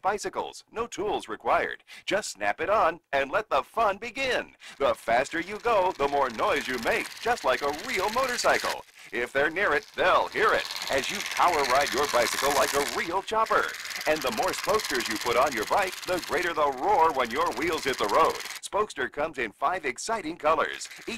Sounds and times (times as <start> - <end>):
Speech: 0.0 - 21.1
Bicycle: 4.7 - 18.7, 20.6 - 21.1.